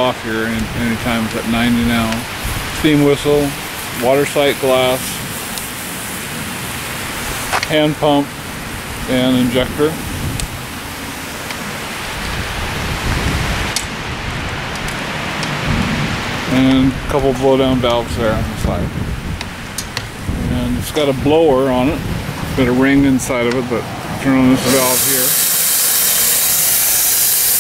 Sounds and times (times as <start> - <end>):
Speech: 0.0 - 5.2, 7.6 - 8.3, 9.1 - 10.0, 16.5 - 18.9, 20.4 - 25.4
Hiss: 2.0 - 8.2, 24.5 - 27.6.